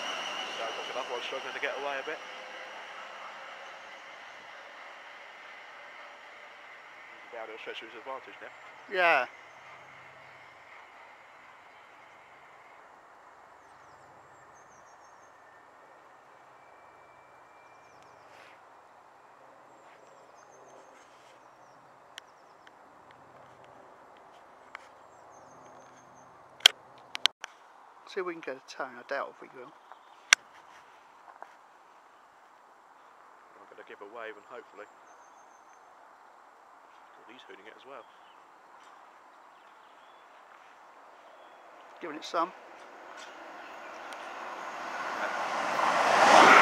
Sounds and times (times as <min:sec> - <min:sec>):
Train: 0:00.0 - 0:13.0, 0:14.4 - 0:18.2, 0:42.3 - 0:46.6.